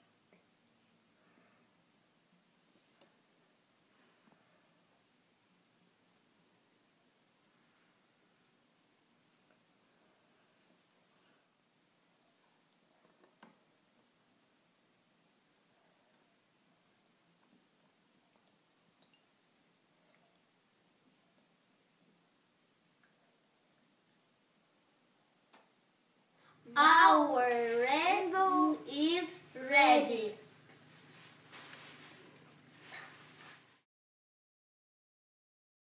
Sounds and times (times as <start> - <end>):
Child speech, kid speaking: 26.7 - 30.5.